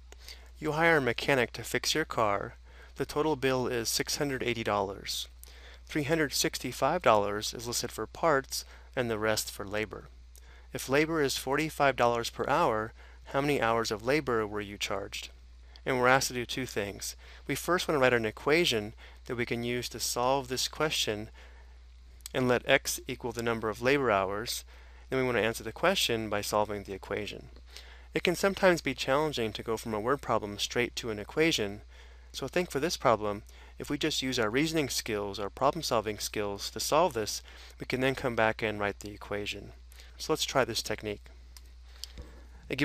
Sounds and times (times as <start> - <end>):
Speech: 0.6 - 10.1, 10.7 - 21.4, 22.3 - 27.5, 28.2 - 41.3.